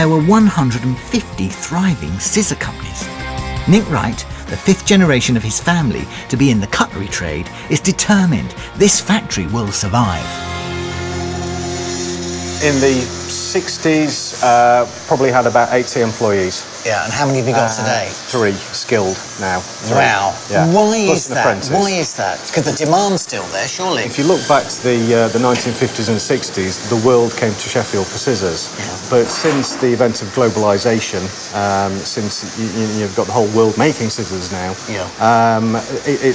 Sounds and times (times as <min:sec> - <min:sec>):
Speech: 0:00.0 - 0:03.1, 0:03.7 - 0:10.4, 0:12.6 - 0:36.3
Music: 0:00.0 - 0:33.0.